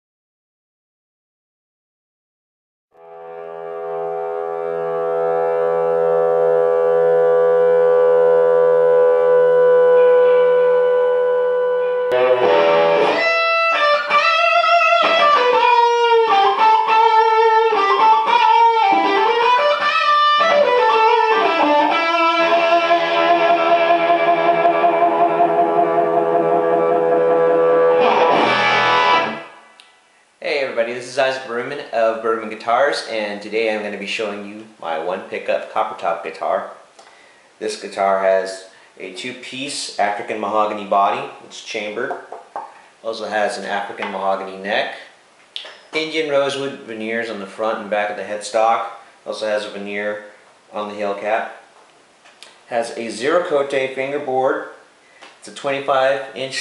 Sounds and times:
Guitar: 3.0s - 30.0s
Inside, small room: 3.0s - 56.6s.

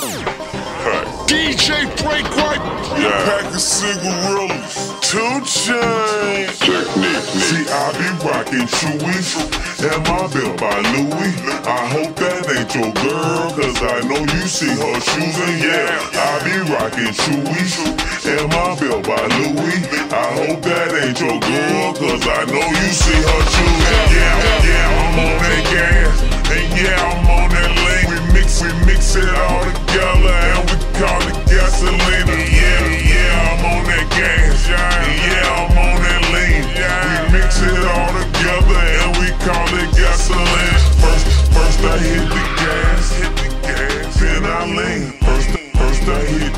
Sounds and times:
Music: 0.0s - 46.5s.

